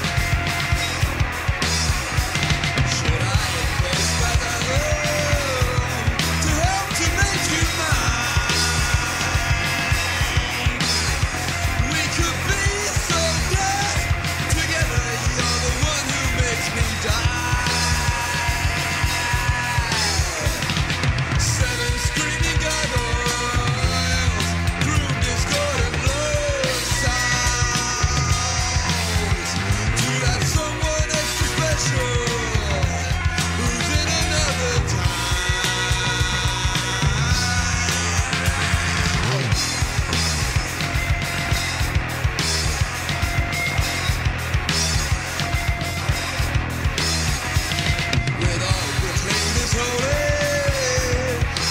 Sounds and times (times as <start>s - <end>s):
Music: 0.0s - 51.7s.